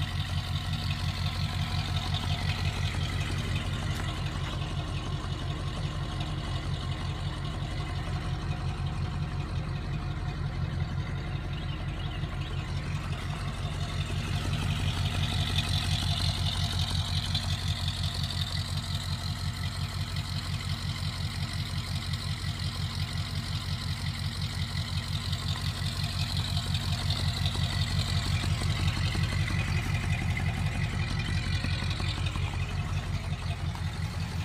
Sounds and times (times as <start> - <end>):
Truck: 0.0 - 34.4.